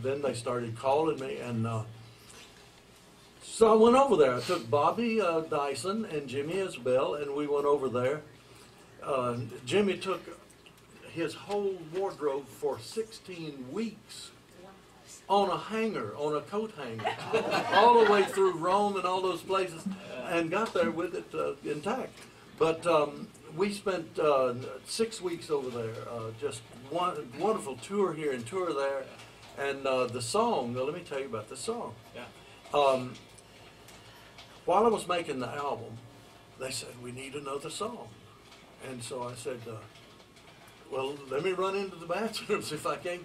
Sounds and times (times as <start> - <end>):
Speech: 0.0 - 1.9, 3.4 - 8.3, 9.0 - 10.4, 11.0 - 33.2, 34.7 - 36.0, 36.6 - 38.2, 38.8 - 39.9, 40.9 - 43.2.